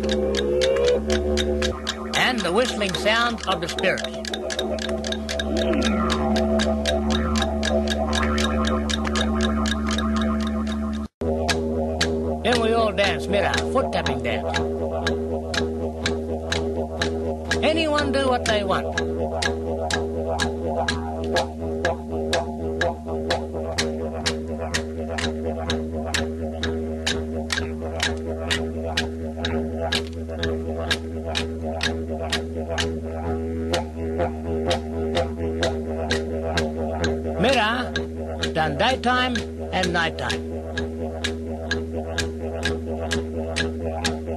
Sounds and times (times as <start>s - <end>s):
Music: 0.0s - 13.8s, 14.5s - 38.6s
Speech: 2.2s - 4.2s, 12.4s - 14.6s, 17.6s - 19.0s, 37.4s - 40.4s.